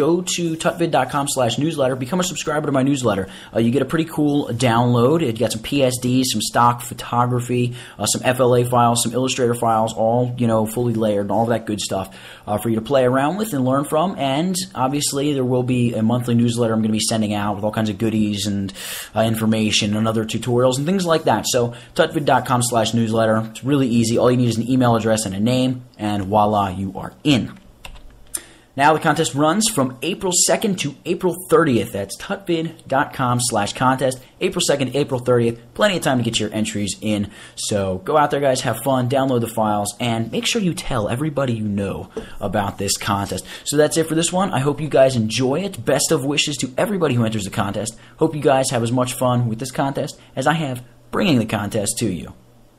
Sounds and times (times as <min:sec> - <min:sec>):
Narration, monologue: 0:00.0 - 0:52.7.